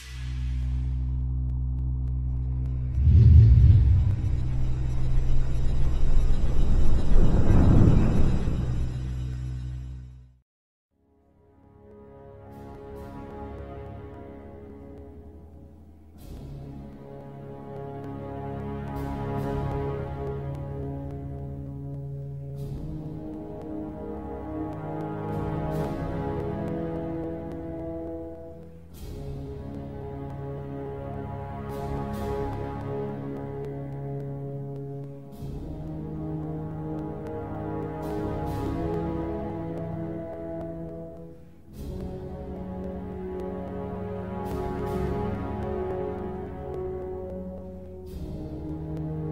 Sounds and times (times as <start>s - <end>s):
Music: 0.0s - 49.3s.